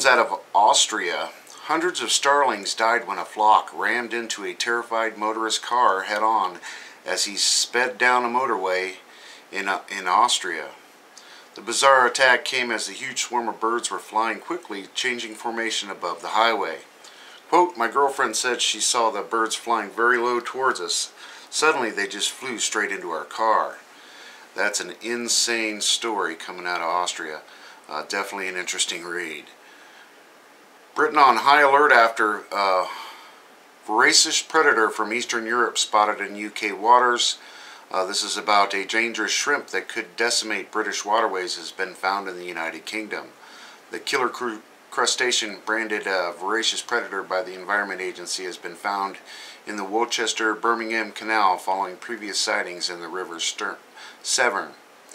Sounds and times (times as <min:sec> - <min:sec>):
Speech: 0:00.0 - 0:10.8, 0:11.6 - 0:16.9, 0:17.5 - 0:23.9, 0:24.6 - 0:29.6, 0:31.0 - 0:33.2, 0:33.8 - 0:55.1.